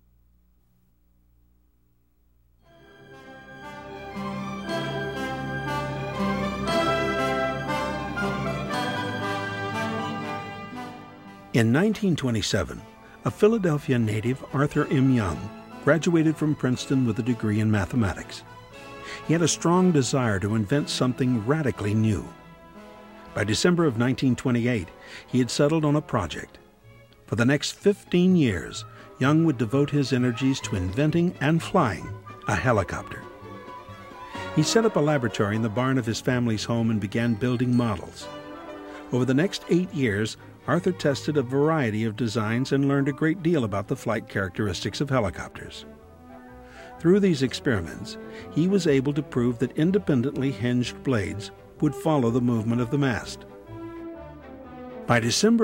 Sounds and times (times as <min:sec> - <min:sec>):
Music: 0:02.5 - 0:55.6
Speech: 0:11.6 - 0:18.4, 0:19.2 - 0:22.4, 0:23.4 - 0:26.6, 0:27.3 - 0:33.3, 0:34.4 - 0:38.3, 0:39.1 - 0:45.9, 0:47.0 - 0:53.4, 0:55.1 - 0:55.6.